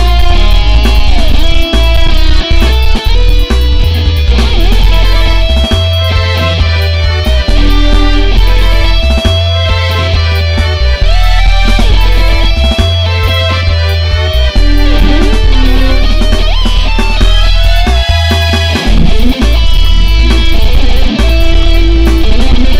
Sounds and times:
Music: 0.0s - 22.7s.

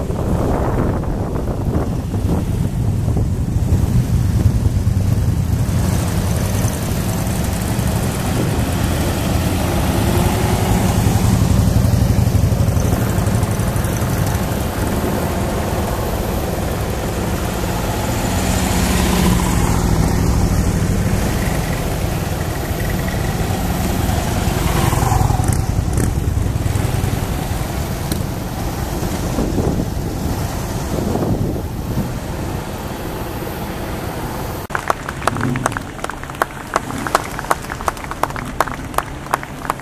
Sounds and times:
Car: 0.0s - 39.8s
Traffic noise, roadway noise: 0.0s - 39.8s.

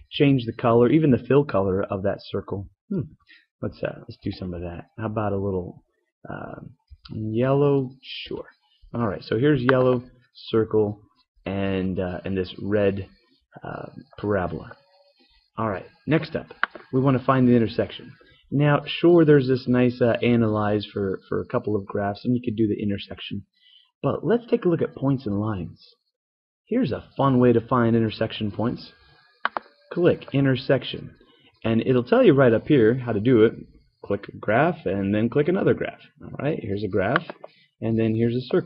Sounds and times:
Narration, monologue: 0.0s - 38.6s.

